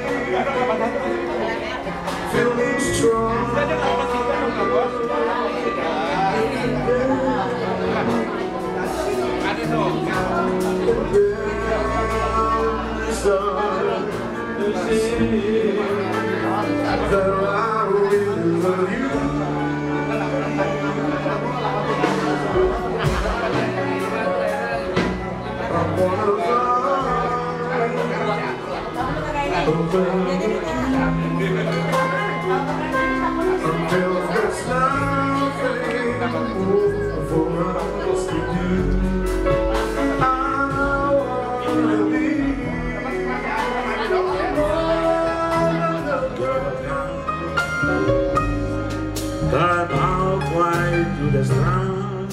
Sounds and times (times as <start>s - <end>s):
Blues: 0.0s - 52.3s
Jazz: 0.0s - 52.3s
Speech: 0.0s - 52.3s.